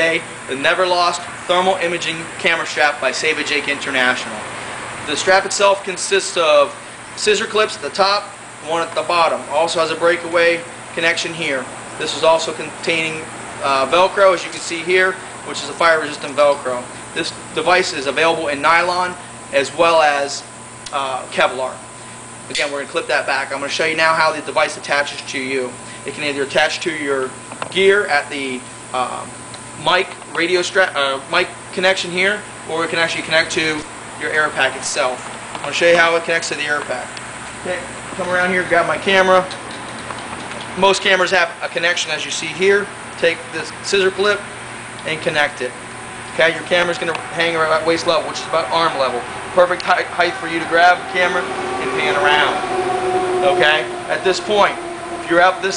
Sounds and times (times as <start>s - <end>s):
Speech: 0.0s - 4.5s, 5.1s - 21.9s, 22.5s - 39.6s, 40.8s - 45.8s, 46.4s - 52.7s, 53.4s - 55.7s.